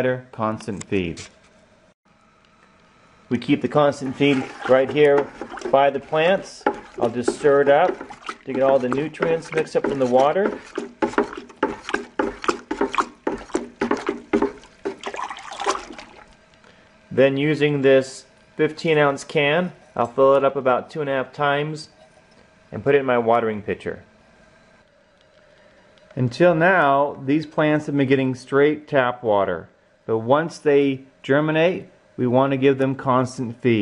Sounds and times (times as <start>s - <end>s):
Speech: 0.0s - 1.3s, 3.3s - 10.6s, 17.1s - 22.0s, 22.7s - 24.1s, 26.2s - 33.8s.